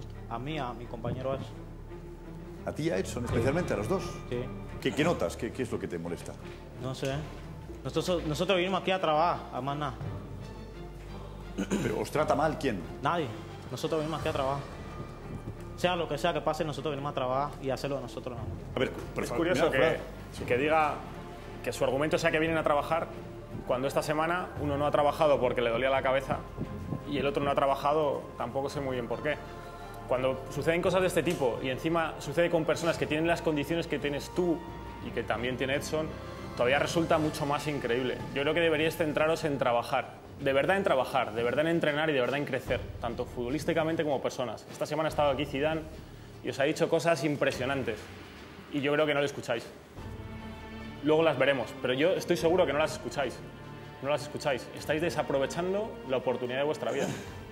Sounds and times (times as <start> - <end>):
Music: 0.0 - 57.5.